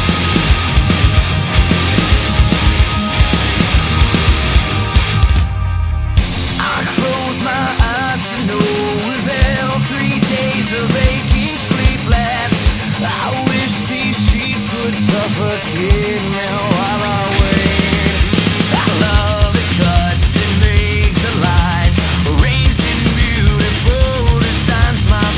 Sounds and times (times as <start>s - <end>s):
Music: 0.0s - 25.3s.